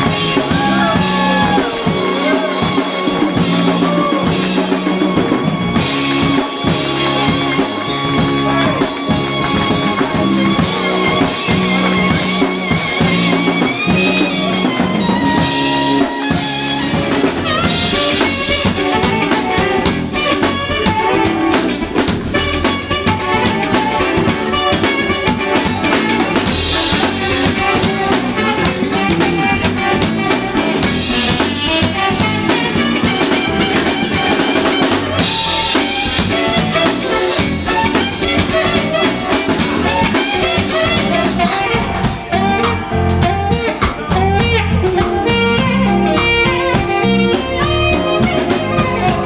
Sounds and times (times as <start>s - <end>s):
Music: 0.0s - 49.2s
Speech: 8.3s - 9.0s.